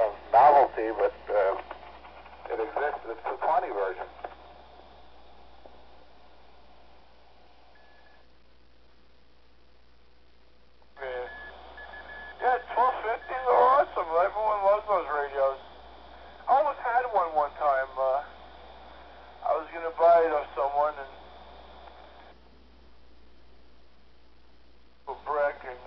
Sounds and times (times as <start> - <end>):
Speech: 0.0 - 1.6, 2.5 - 4.2, 11.0 - 11.3, 12.4 - 15.6, 16.4 - 18.3, 19.4 - 21.2, 25.1 - 25.8
Radio: 0.0 - 6.0, 11.0 - 22.4, 25.0 - 25.8.